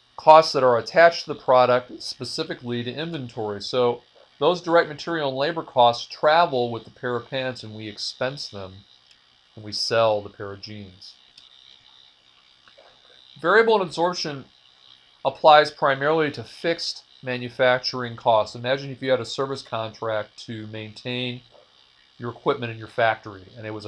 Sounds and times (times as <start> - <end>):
Speech: 0.2 - 8.9, 9.6 - 11.2, 13.4 - 14.5, 15.3 - 21.5, 22.2 - 23.8.